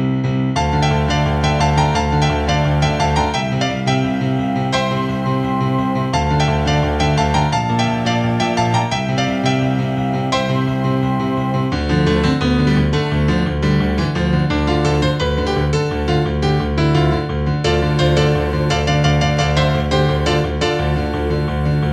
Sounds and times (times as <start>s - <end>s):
Classical music: 0.0s - 21.9s
Electric piano: 0.0s - 21.9s.